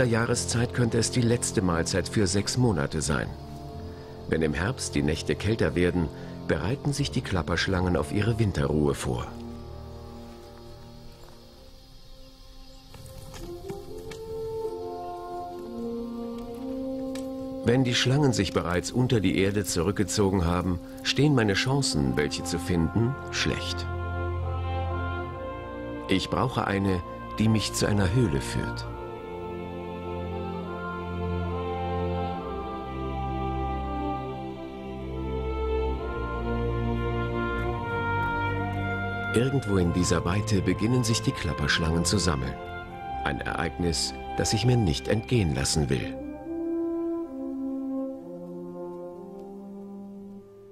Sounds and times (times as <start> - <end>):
Speech: 0.0 - 3.4, 4.3 - 9.4, 17.6 - 23.9, 26.1 - 28.9, 39.3 - 42.6, 43.2 - 46.2
Music: 0.0 - 50.7
Outside, rural or natural: 0.0 - 50.7.